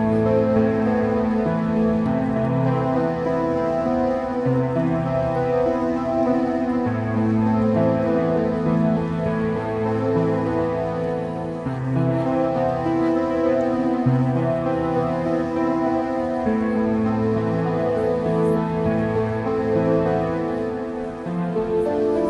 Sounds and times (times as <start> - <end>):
Tender music: 0.0 - 22.3.